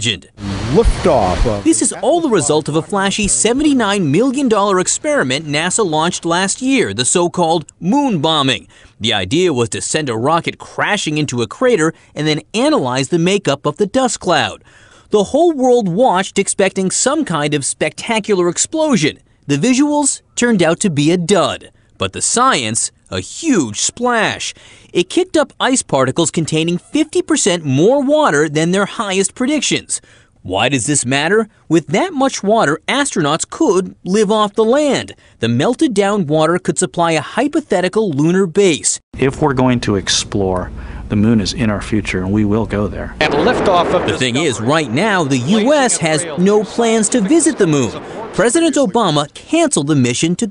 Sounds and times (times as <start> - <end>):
Speech: 0.0 - 14.6, 15.2 - 50.5.